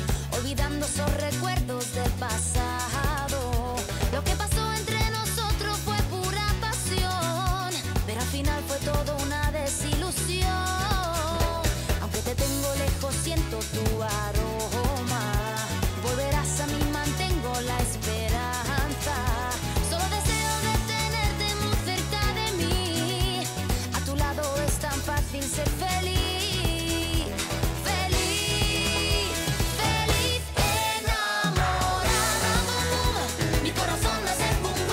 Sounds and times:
Music: 0:00.0 - 0:34.9.

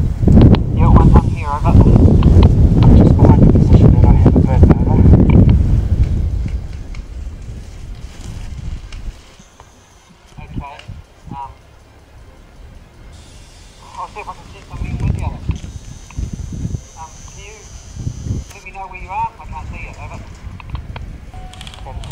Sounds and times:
Speech: 0:00.8 - 0:02.0, 0:03.0 - 0:05.1, 0:10.4 - 0:11.6, 0:13.8 - 0:15.5, 0:17.0 - 0:17.7, 0:18.5 - 0:20.3, 0:21.8 - 0:22.1.

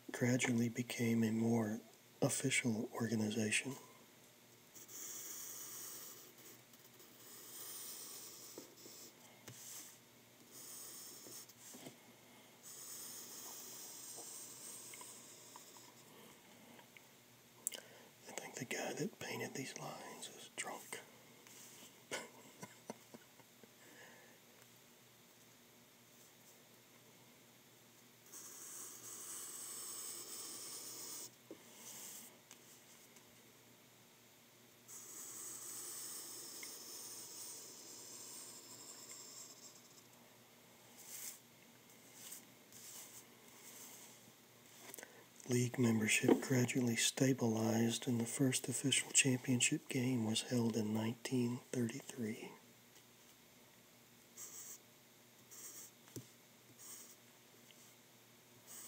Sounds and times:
Inside, small room: 0:00.0 - 0:58.8
Speech: 0:00.1 - 0:03.9, 0:18.2 - 0:21.1, 0:45.4 - 0:52.6
Writing: 0:04.8 - 0:11.9, 0:12.6 - 0:16.1, 0:28.3 - 0:32.3, 0:34.9 - 0:40.1, 0:41.0 - 0:41.4, 0:42.0 - 0:44.9, 0:54.4 - 0:54.8, 0:55.5 - 0:57.9.

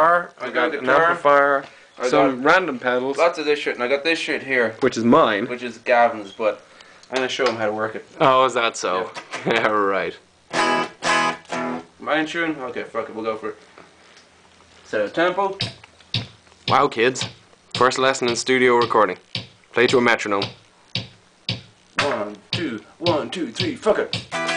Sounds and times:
Speech: 0:00.0 - 0:10.2, 0:12.0 - 0:13.6, 0:14.9 - 0:15.7, 0:16.7 - 0:19.2, 0:19.8 - 0:20.6, 0:22.0 - 0:24.2
Music: 0:10.5 - 0:11.9, 0:15.6 - 0:24.5.

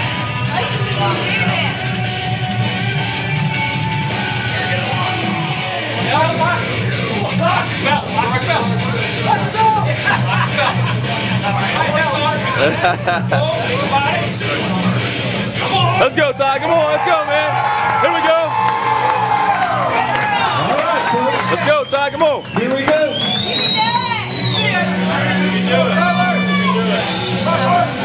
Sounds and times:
Music: 0:00.0 - 0:28.0.

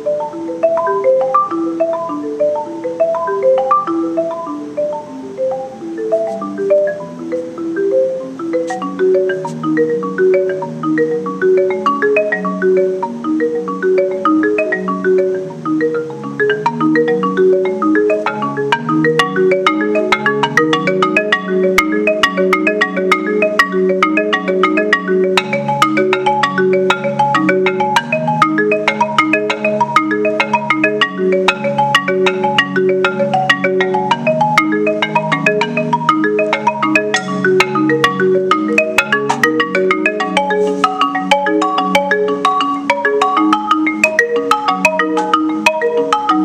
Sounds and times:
Glockenspiel: 0:00.0 - 0:46.4
Marimba, xylophone: 0:00.0 - 0:46.4.

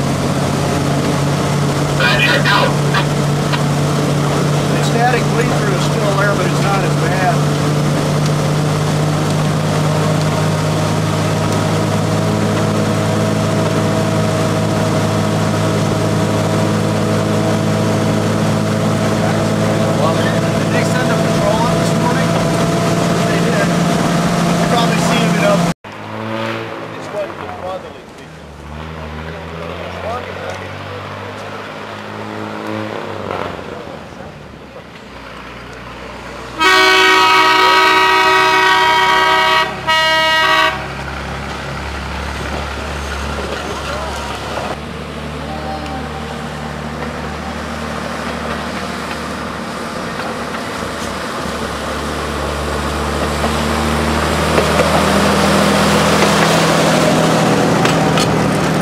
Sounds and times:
Speech: 0:02.0 - 0:03.1, 0:04.7 - 0:07.4, 0:19.2 - 0:22.4, 0:23.2 - 0:23.7, 0:24.6 - 0:25.7, 0:27.0 - 0:31.5, 0:43.5 - 0:44.4, 0:45.4 - 0:46.3.

